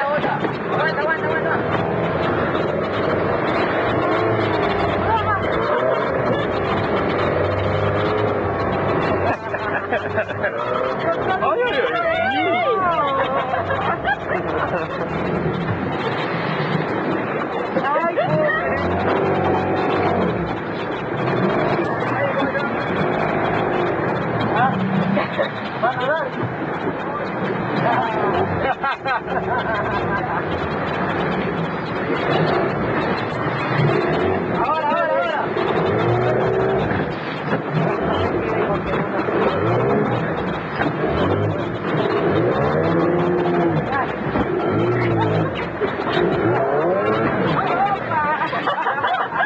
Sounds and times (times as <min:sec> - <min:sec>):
Speech: 0:00.0 - 0:02.1, 0:04.9 - 0:06.8, 0:09.3 - 0:15.2, 0:17.6 - 0:20.3, 0:21.8 - 0:30.5, 0:34.1 - 0:37.0, 0:37.8 - 0:41.8, 0:42.4 - 0:48.8
Boat, Water vehicle: 0:00.0 - 0:49.4.